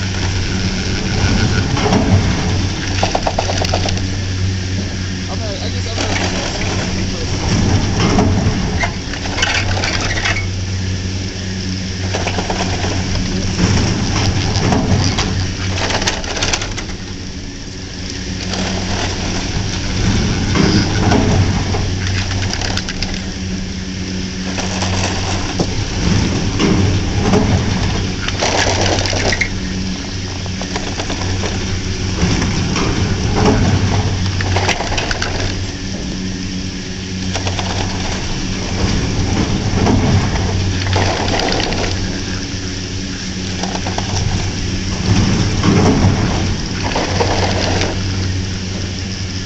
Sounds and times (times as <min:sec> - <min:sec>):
Outside, rural or natural: 0:00.0 - 0:49.4.